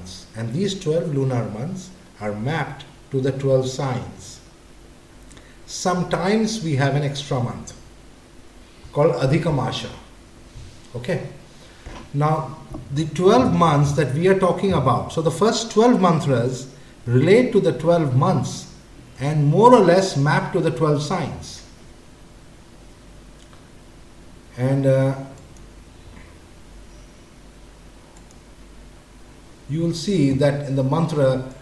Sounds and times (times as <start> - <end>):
Speech: 0.0 - 4.5, 5.7 - 7.8, 8.9 - 10.1, 10.9 - 11.4, 12.1 - 21.7, 24.6 - 25.4, 29.7 - 31.6.